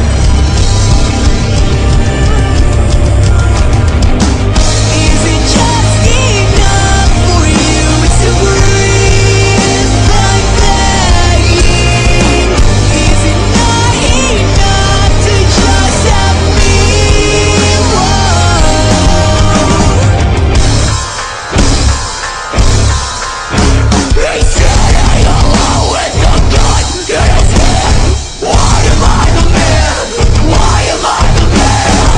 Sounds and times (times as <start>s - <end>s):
Music: 0.0s - 32.1s.